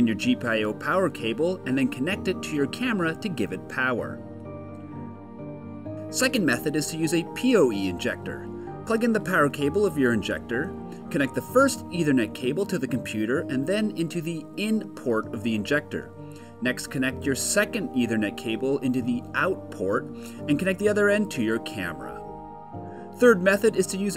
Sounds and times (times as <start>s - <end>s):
Speech: 0.0s - 4.2s, 6.2s - 22.2s, 23.2s - 24.1s
Music: 0.0s - 24.1s.